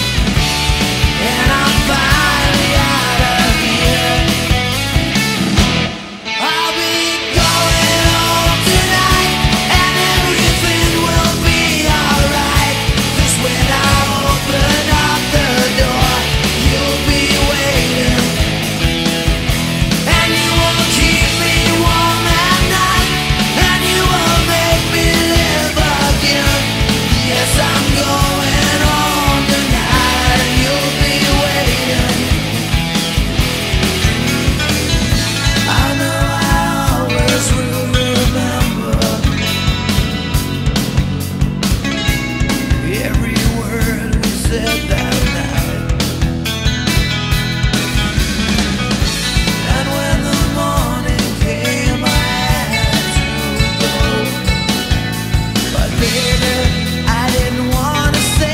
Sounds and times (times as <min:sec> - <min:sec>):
Progressive rock: 0:00.0 - 0:58.5
Singing: 0:01.0 - 0:04.8, 0:06.3 - 0:18.7, 0:20.0 - 0:32.6, 0:35.5 - 0:39.6, 0:49.4 - 0:54.9, 0:55.6 - 0:58.5.